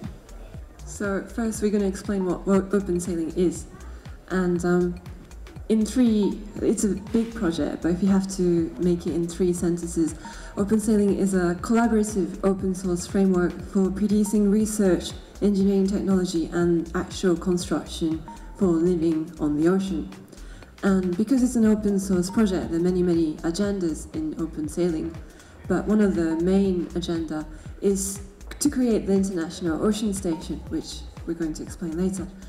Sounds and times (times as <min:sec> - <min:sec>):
Electronica: 0:00.0 - 0:32.4
Speech: 0:00.3 - 0:20.2, 0:20.8 - 0:32.4.